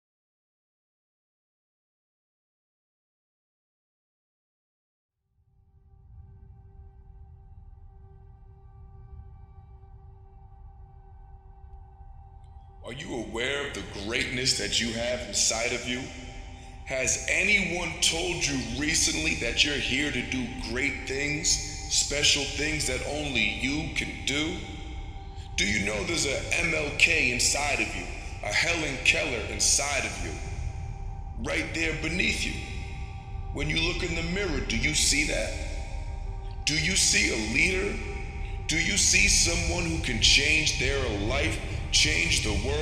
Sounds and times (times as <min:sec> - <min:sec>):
Male speech, man speaking: 0:12.8 - 0:16.2, 0:16.8 - 0:24.8, 0:25.5 - 0:30.5, 0:31.4 - 0:35.9, 0:36.6 - 0:42.8.